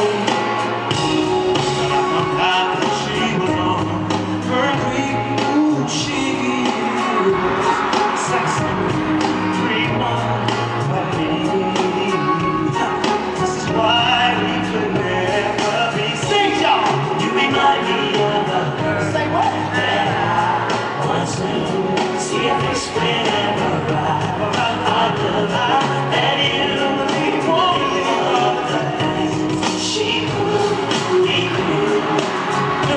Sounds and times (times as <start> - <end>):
Inside, large room or hall: 0.0 - 32.9
Music: 0.0 - 32.9
Singing: 0.0 - 32.9.